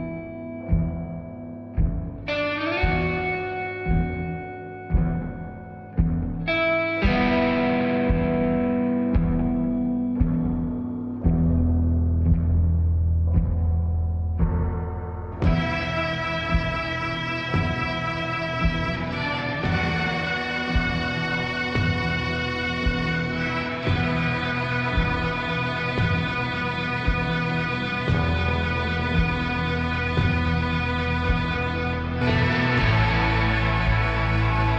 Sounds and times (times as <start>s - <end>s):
Music: 0.0s - 34.7s.